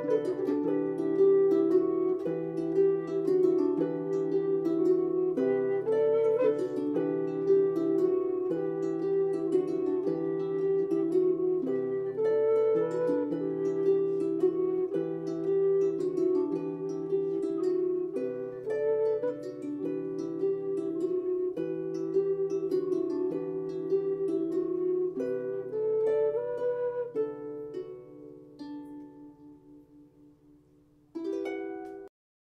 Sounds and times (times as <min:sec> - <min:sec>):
Zither: 0:00.0 - 0:32.1.